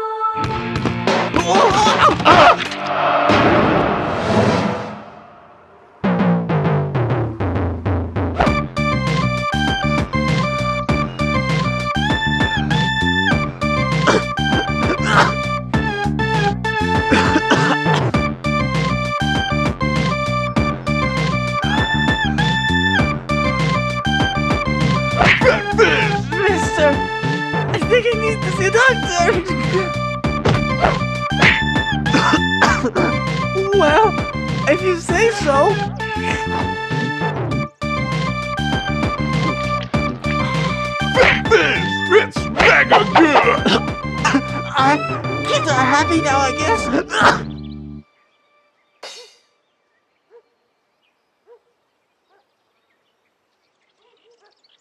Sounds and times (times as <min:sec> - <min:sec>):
Music: 0:00.0 - 0:04.8, 0:06.0 - 0:49.4
Speech: 0:01.4 - 0:02.6, 0:15.0 - 0:15.3, 0:25.2 - 0:27.0, 0:27.8 - 0:29.9, 0:32.1 - 0:36.7, 0:41.2 - 0:47.5.